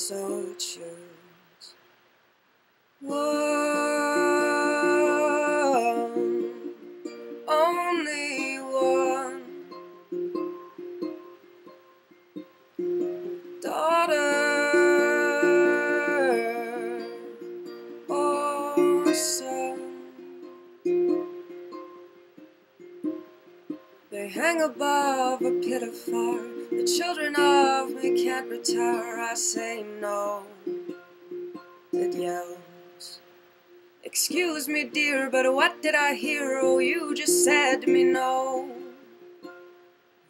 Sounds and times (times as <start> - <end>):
Ukulele: 0.0 - 1.7, 3.0 - 40.2
Inside, small room: 0.0 - 40.2.